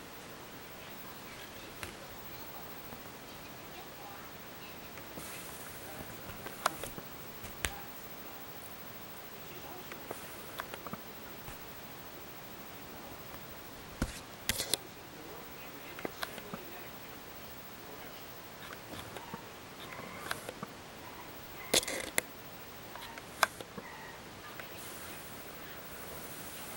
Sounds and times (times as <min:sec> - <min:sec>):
Speech: 0:00.6 - 0:11.7, 0:14.8 - 0:21.2.